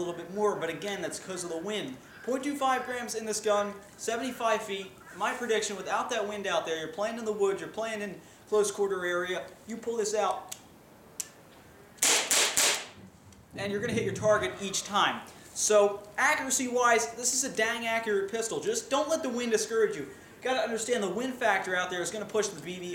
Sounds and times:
Speech: 0:00.0 - 0:10.6, 0:13.6 - 0:22.9.

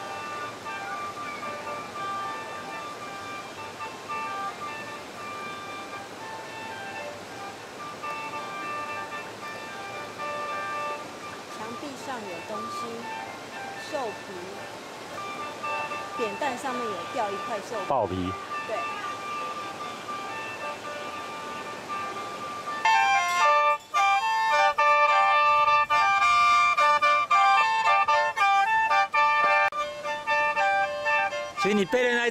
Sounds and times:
Music: 0:00.0 - 0:32.3.

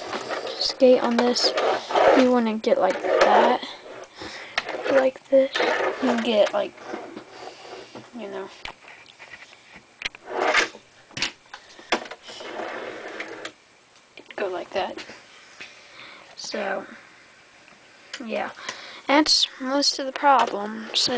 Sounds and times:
Inside, small room: 0:00.0 - 0:21.1
Speech: 0:00.5 - 0:03.8, 0:04.9 - 0:06.7, 0:14.4 - 0:15.0, 0:16.4 - 0:17.0, 0:18.2 - 0:21.1.

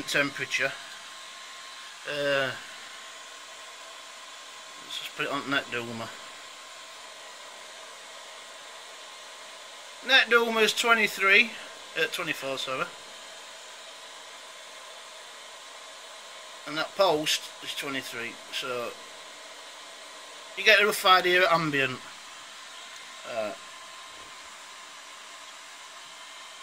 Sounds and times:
Speech: 0:00.0 - 0:00.8, 0:02.1 - 0:02.6, 0:04.8 - 0:06.2, 0:10.0 - 0:12.9, 0:16.7 - 0:19.0, 0:20.6 - 0:22.0, 0:23.2 - 0:23.6.

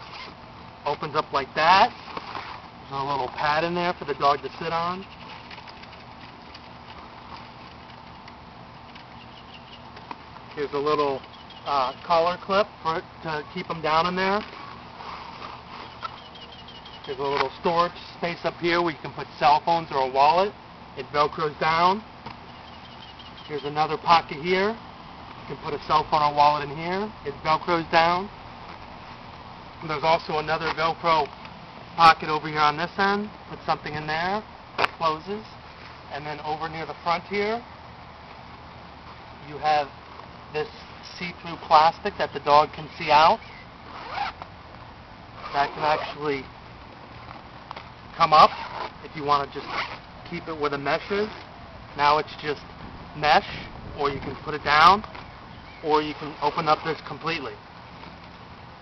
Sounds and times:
Speech: 0:00.9 - 0:02.0, 0:02.9 - 0:05.1, 0:10.6 - 0:14.5, 0:17.1 - 0:22.1, 0:23.5 - 0:24.8, 0:25.5 - 0:28.3, 0:29.8 - 0:31.3, 0:32.0 - 0:37.7, 0:39.4 - 0:39.9, 0:40.5 - 0:43.4, 0:45.5 - 0:46.5, 0:48.2 - 0:51.4, 0:52.0 - 0:55.1, 0:55.8 - 0:57.6.

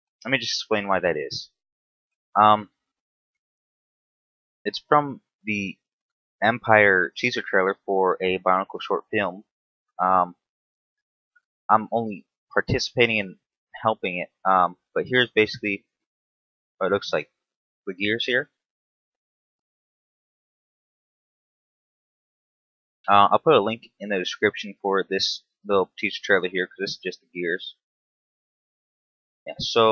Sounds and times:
Speech: 0:00.2 - 0:01.6, 0:02.4 - 0:02.8, 0:04.7 - 0:10.5, 0:11.7 - 0:15.8, 0:16.8 - 0:17.3, 0:17.9 - 0:18.6, 0:23.1 - 0:27.8, 0:29.5 - 0:29.9.

